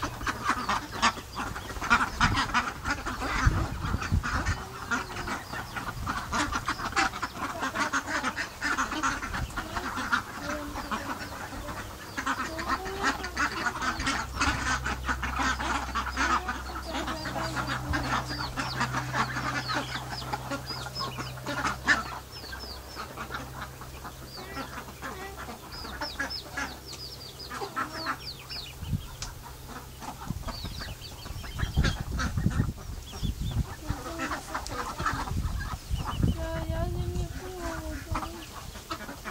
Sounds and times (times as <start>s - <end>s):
Cluck: 0.0s - 39.3s
Honk: 0.0s - 39.3s.